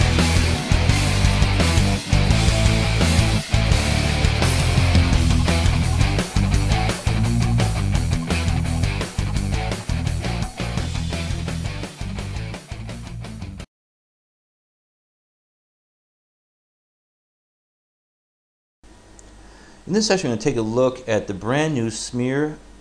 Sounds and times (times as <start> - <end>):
Music: 0.0 - 13.7
Speech: 19.9 - 22.6.